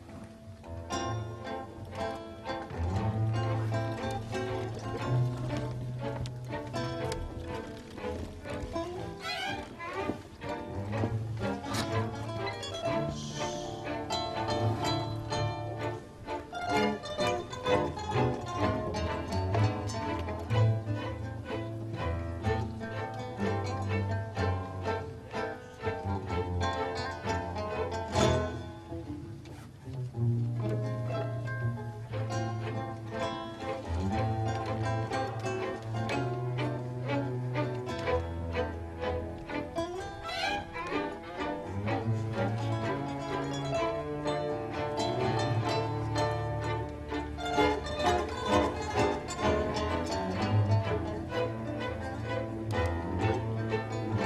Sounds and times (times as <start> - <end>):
Strum: 0.0 - 54.2.